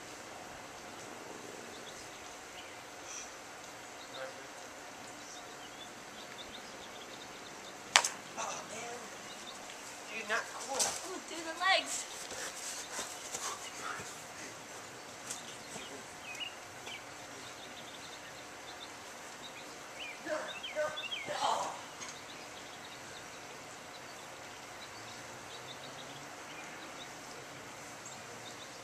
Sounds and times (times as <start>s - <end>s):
Outside, rural or natural: 0.0s - 28.8s.